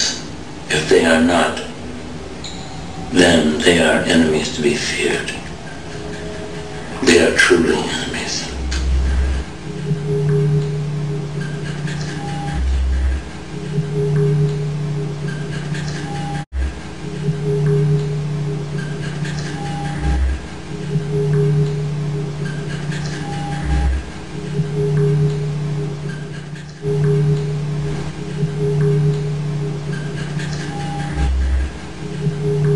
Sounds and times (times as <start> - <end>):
Music: 2.4 - 32.7.